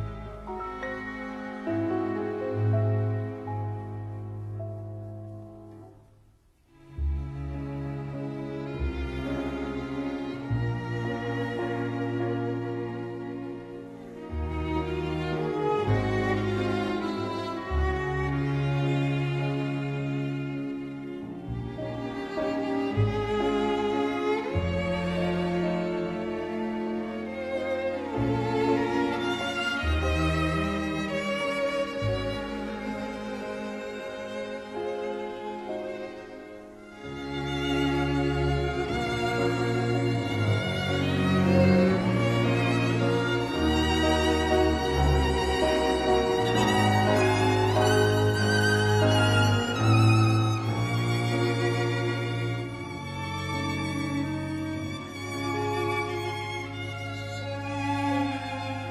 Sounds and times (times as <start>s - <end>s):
Violin, fiddle: 0.0s - 5.7s, 6.7s - 58.9s.